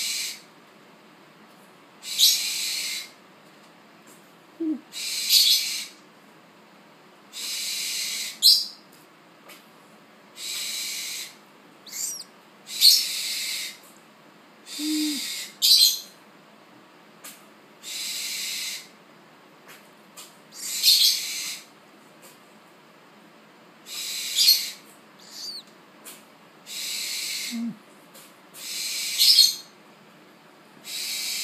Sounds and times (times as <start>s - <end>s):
Domestic animals, pets: 10.4s - 13.8s, 14.7s - 16.0s, 23.9s - 27.8s.